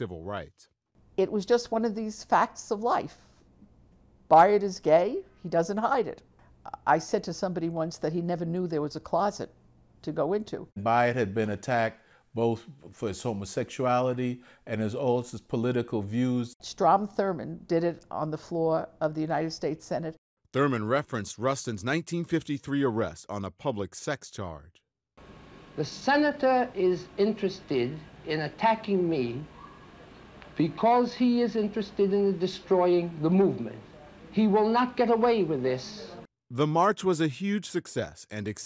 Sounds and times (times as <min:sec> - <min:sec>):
Speech: 0:00.0 - 0:03.2, 0:10.1 - 0:24.8, 0:30.6 - 0:38.6.